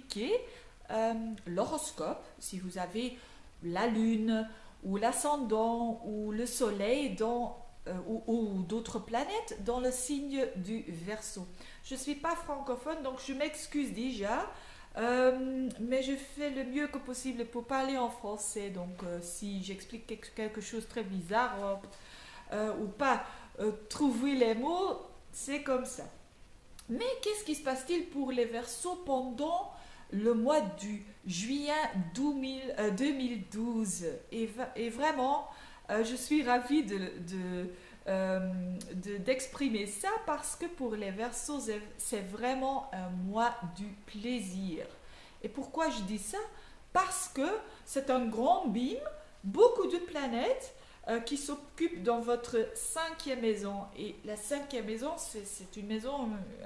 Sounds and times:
Speech: 0.0s - 21.9s, 22.5s - 26.2s, 26.8s - 56.6s.

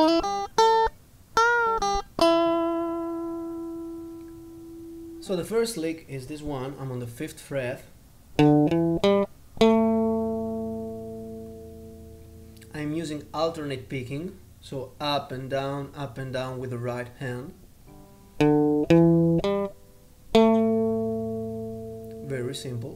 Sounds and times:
Speech: 5.2s - 7.9s, 12.6s - 17.6s, 22.2s - 22.9s
Acoustic guitar: 8.4s - 13.7s, 17.2s - 22.9s.

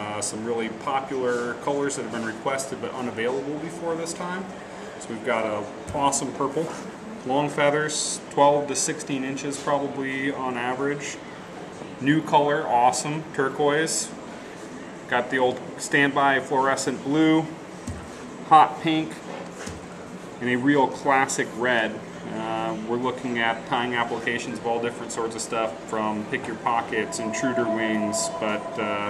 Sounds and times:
Speech: 0.0s - 14.2s, 15.0s - 17.6s, 18.4s - 19.2s, 20.4s - 29.0s.

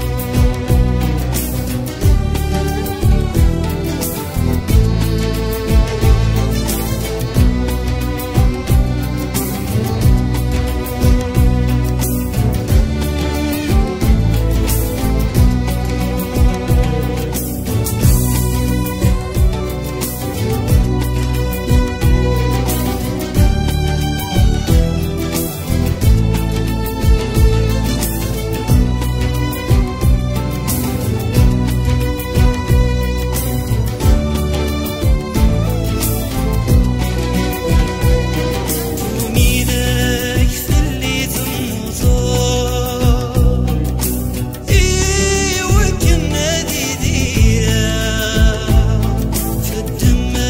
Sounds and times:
Music: 0.0s - 50.4s.

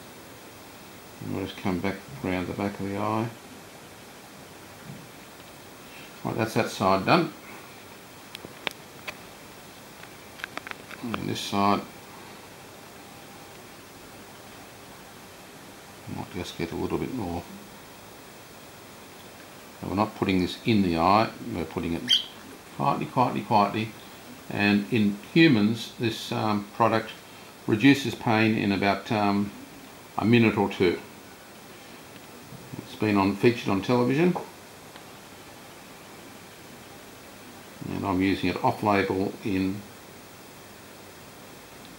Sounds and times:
Inside, small room: 0.0s - 41.9s
Speech: 1.2s - 3.4s, 6.2s - 7.4s, 11.0s - 11.9s, 16.0s - 17.6s, 19.8s - 22.2s, 22.8s - 29.6s, 30.2s - 31.1s, 32.7s - 34.5s, 37.8s - 39.9s
Bird: 22.0s - 22.6s.

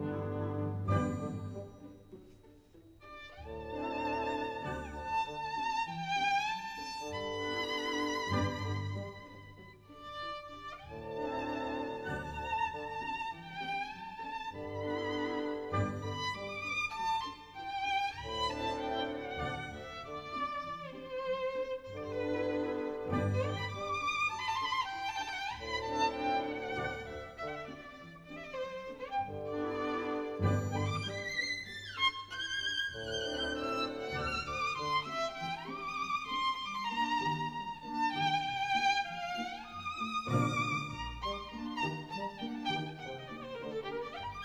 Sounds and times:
Violin, fiddle: 0.9s - 44.4s.

